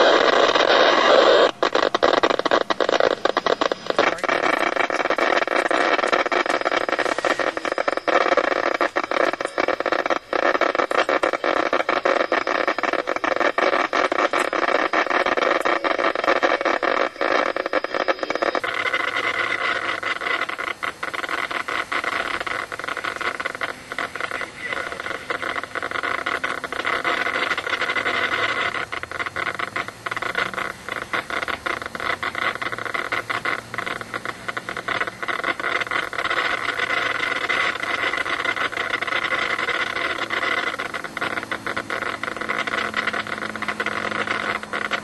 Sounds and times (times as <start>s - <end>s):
Radio: 0.0s - 45.0s
Speech: 24.3s - 25.0s.